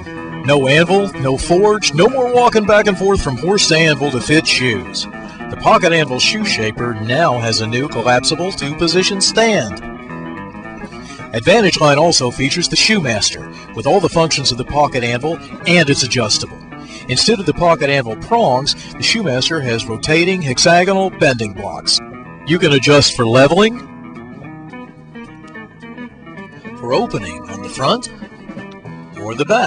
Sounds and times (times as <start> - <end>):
Music: 0.0 - 29.6
Speech: 0.4 - 9.8, 11.3 - 23.8, 26.8 - 28.1, 29.2 - 29.6.